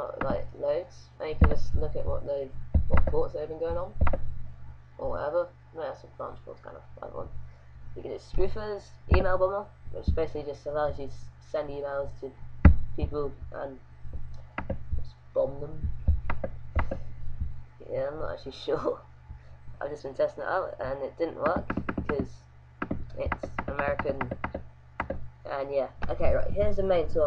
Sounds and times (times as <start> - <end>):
Speech: 0.0 - 4.0, 5.0 - 7.3, 8.0 - 12.4, 13.0 - 13.8, 15.0 - 15.9, 17.8 - 19.0, 19.8 - 22.4, 23.1 - 24.4, 25.5 - 27.2.